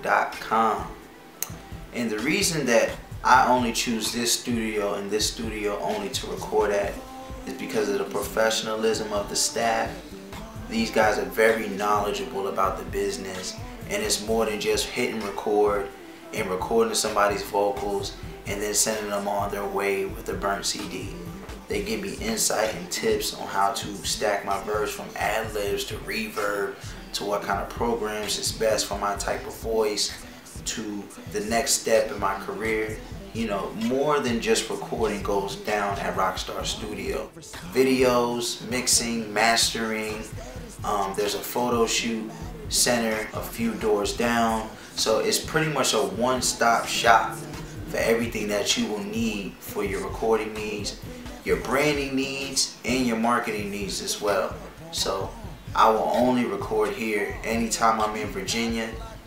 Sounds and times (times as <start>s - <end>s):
Speech: 0.0s - 1.0s, 1.9s - 59.2s
Music: 0.0s - 59.2s.